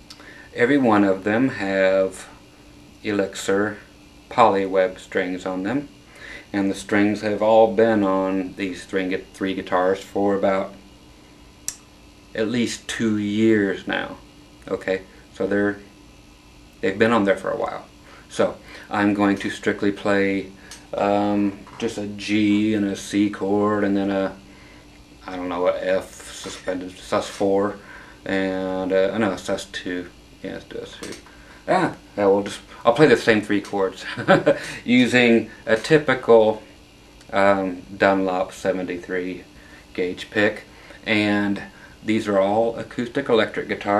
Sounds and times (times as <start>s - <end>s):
Speech: 0.6s - 2.4s, 3.0s - 10.8s, 12.4s - 15.9s, 16.8s - 24.4s, 25.2s - 36.6s, 37.3s - 43.9s.